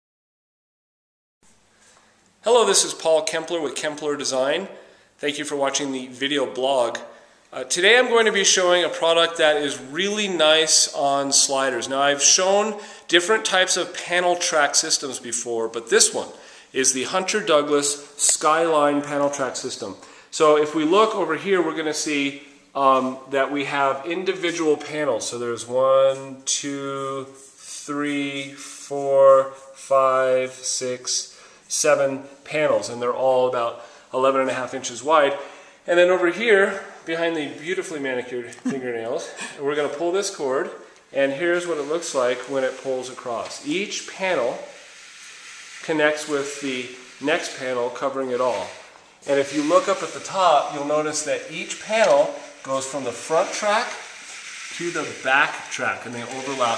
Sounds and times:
Speech: 0:02.5 - 0:44.8, 0:45.8 - 0:54.1, 0:54.7 - 0:56.7.

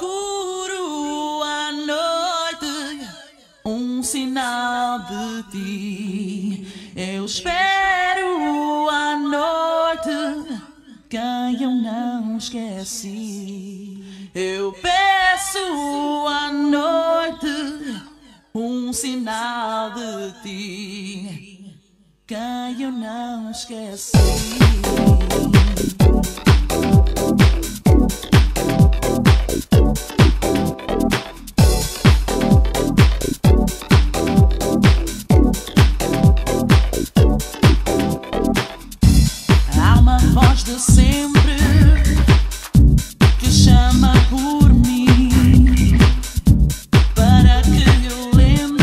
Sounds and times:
Music: 0:24.2 - 0:48.8.

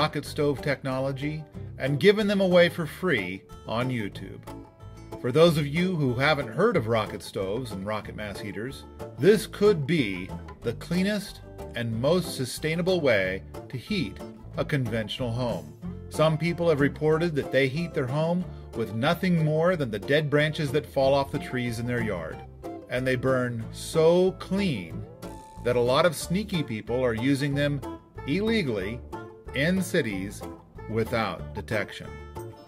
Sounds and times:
Speech: 0:00.0 - 0:04.4, 0:05.2 - 0:25.0, 0:25.6 - 0:32.2
Music: 0:00.0 - 0:32.6.

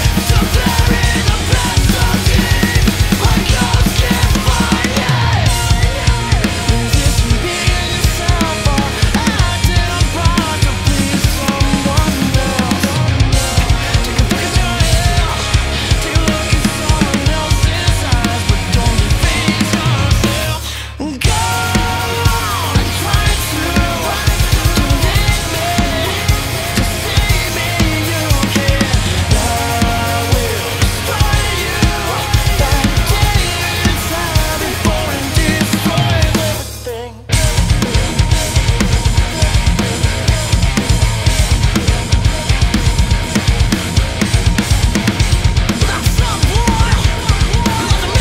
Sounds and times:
Drum: 0:00.0 - 0:48.2
Drum kit: 0:00.0 - 0:48.2.

